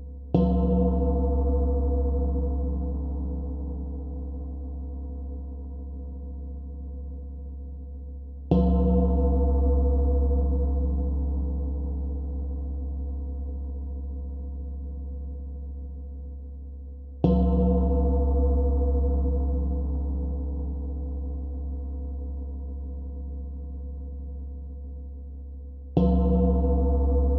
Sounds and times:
Gong: 0.3s - 7.4s, 8.5s - 15.8s, 17.2s - 24.7s, 26.0s - 27.3s.

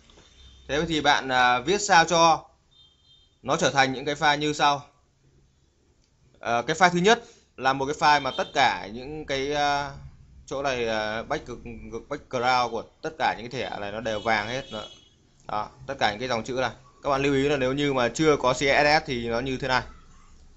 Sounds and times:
Speech: 0.7s - 2.5s, 3.5s - 5.0s, 6.4s - 14.9s, 15.5s - 20.0s.

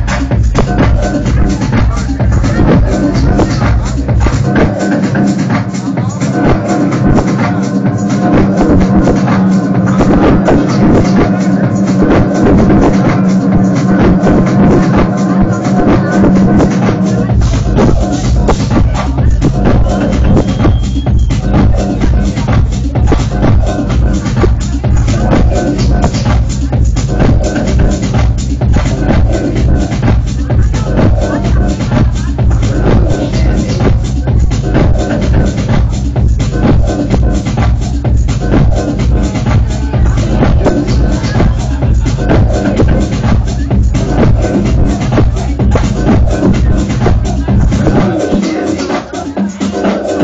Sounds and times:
Music: 0.0s - 50.2s.

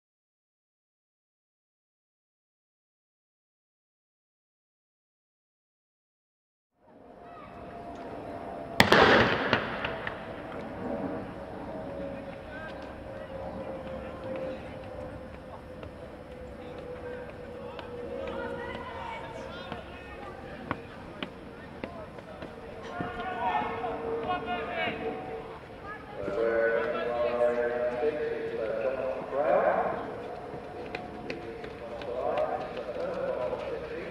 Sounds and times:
Run: 9.7s - 34.1s
Speech: 12.0s - 34.1s.

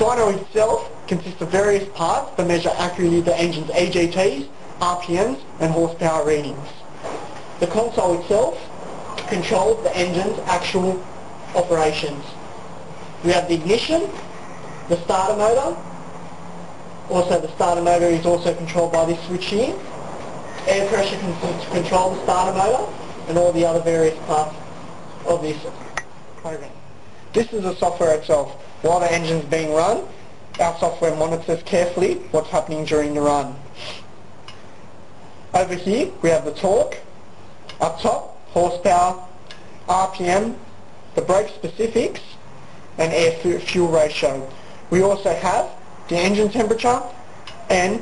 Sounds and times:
Speech: 0.0s - 6.9s, 7.6s - 12.4s, 13.2s - 14.3s, 14.9s - 15.9s, 17.1s - 19.9s, 20.6s - 24.6s, 25.2s - 34.1s, 35.5s - 37.1s, 37.7s - 42.4s, 43.0s - 48.0s.

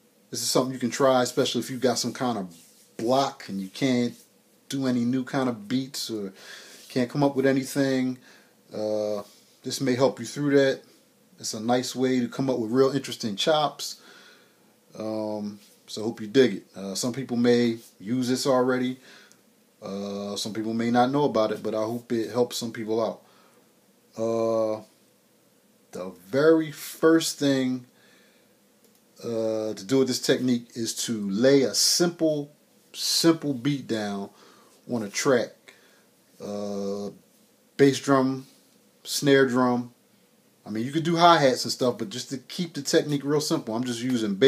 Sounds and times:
Speech: 0.3s - 14.0s, 14.9s - 19.0s, 19.8s - 23.3s, 24.1s - 24.9s, 26.0s - 27.9s, 29.2s - 35.8s, 36.4s - 37.2s, 37.8s - 40.0s, 40.6s - 44.4s.

